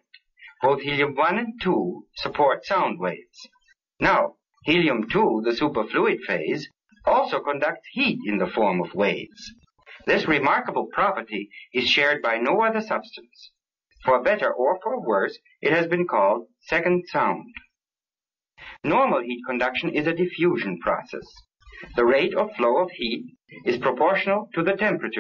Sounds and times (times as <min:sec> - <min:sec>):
Speech: 0:00.0 - 0:17.7, 0:18.6 - 0:25.2.